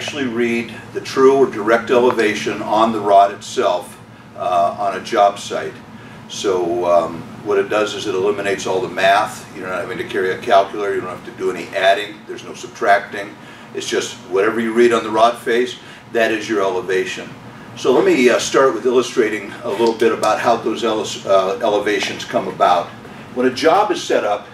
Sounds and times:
Speech: 0.0 - 24.5.

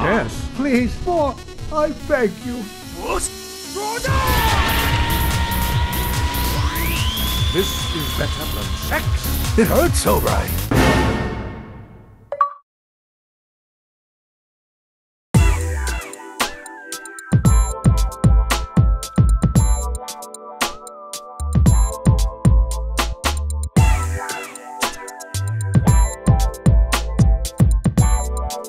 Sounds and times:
Speech: 0.0 - 4.1, 7.6 - 10.6
Music: 0.0 - 12.3, 15.4 - 28.6.

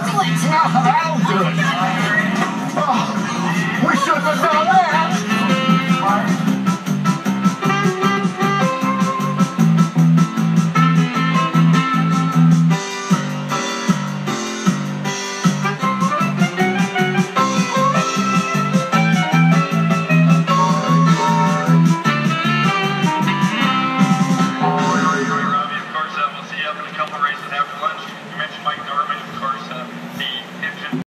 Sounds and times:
Music: 0.0 - 26.1
Speech: 3.8 - 5.3, 24.9 - 31.0.

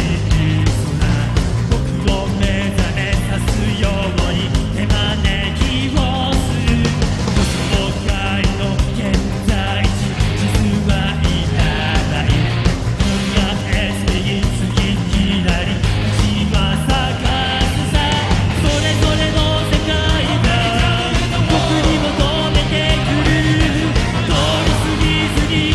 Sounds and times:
Music: 0.0 - 25.7.

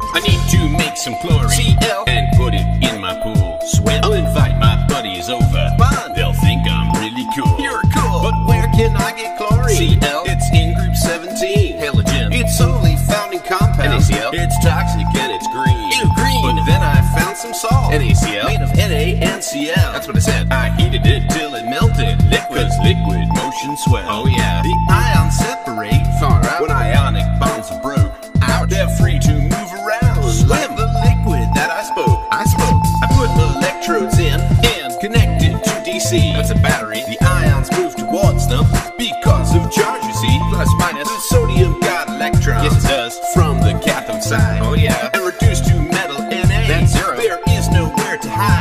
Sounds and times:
Music: 0.0 - 48.6.

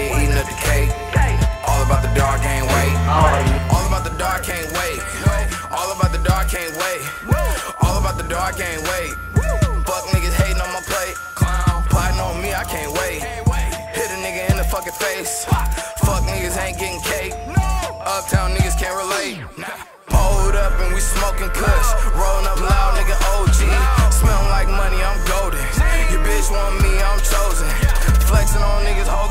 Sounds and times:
Music: 0.0 - 29.3.

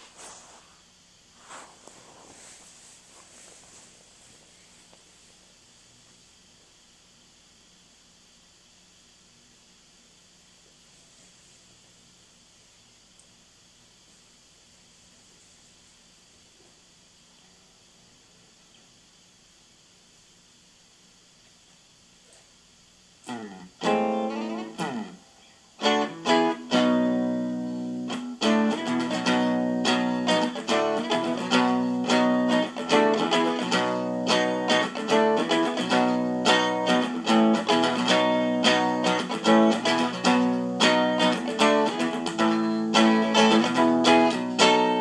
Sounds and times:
Music: 23.3 - 25.2, 25.8 - 45.0.

